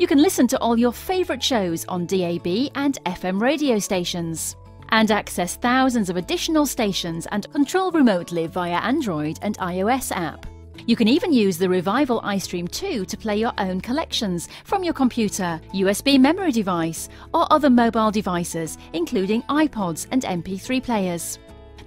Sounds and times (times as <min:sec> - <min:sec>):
Speech: 0:00.0 - 0:21.4
Music: 0:00.0 - 0:21.8.